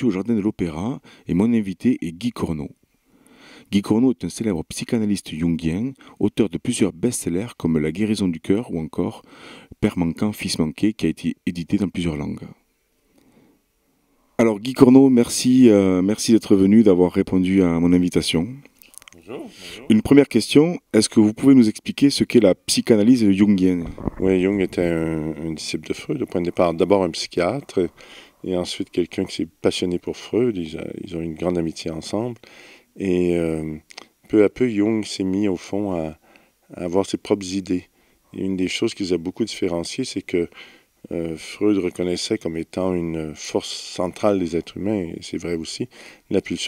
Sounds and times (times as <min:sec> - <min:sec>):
Speech: 0:00.0 - 0:02.8, 0:03.7 - 0:09.2, 0:09.8 - 0:12.6, 0:14.4 - 0:32.4, 0:33.0 - 0:46.6.